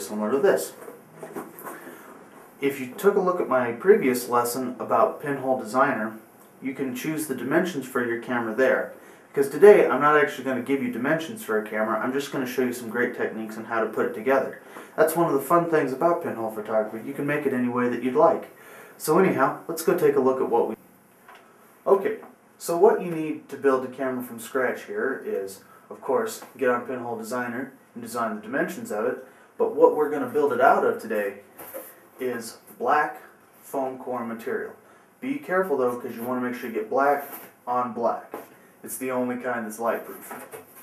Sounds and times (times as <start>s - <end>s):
Speech: 0.0s - 0.9s, 2.6s - 20.8s, 21.8s - 31.5s, 32.2s - 40.6s.